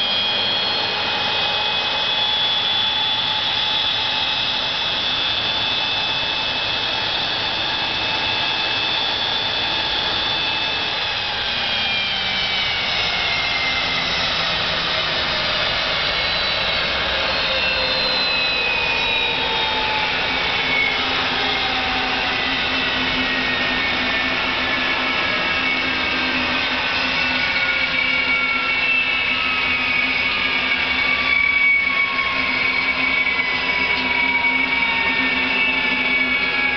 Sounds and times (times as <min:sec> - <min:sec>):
Engine: 0:00.0 - 0:36.7.